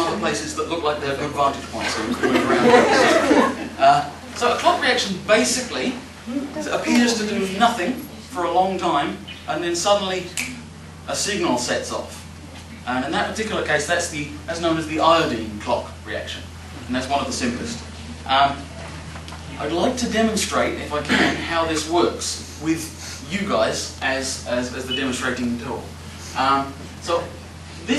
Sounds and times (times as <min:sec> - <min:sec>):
Speech: 0:00.0 - 0:02.8, 0:03.8 - 0:10.5, 0:11.1 - 0:12.2, 0:12.8 - 0:18.7, 0:19.5 - 0:27.9.